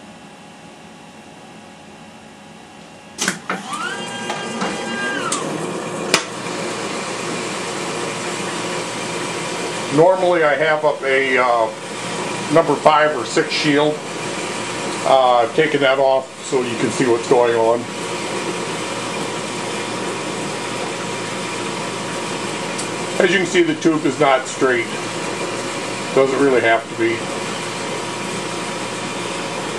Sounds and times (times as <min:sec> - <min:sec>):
Speech: 0:09.9 - 0:11.8, 0:12.5 - 0:14.0, 0:15.0 - 0:17.9, 0:23.2 - 0:25.0, 0:26.1 - 0:27.2.